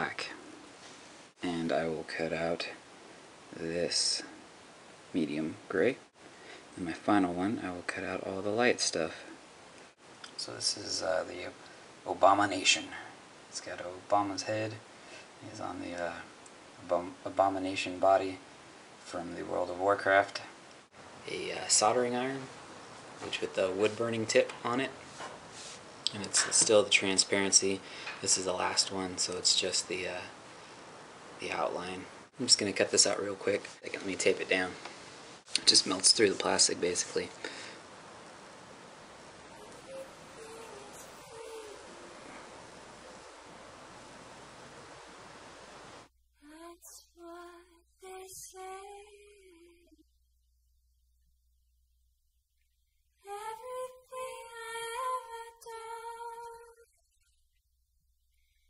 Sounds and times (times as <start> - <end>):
Speech: 0.0 - 0.4, 1.4 - 2.8, 3.6 - 4.4, 5.2 - 6.0, 6.8 - 9.3, 10.4 - 14.8, 15.4 - 18.4, 19.1 - 20.5, 21.3 - 22.5, 23.2 - 25.0, 26.1 - 30.4, 31.4 - 34.8, 35.6 - 37.4.